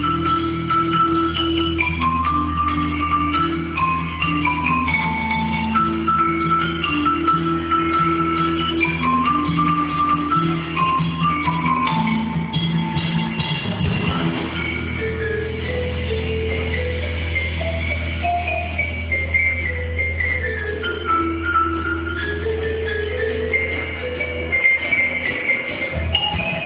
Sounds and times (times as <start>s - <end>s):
Percussion: 0.0s - 26.6s.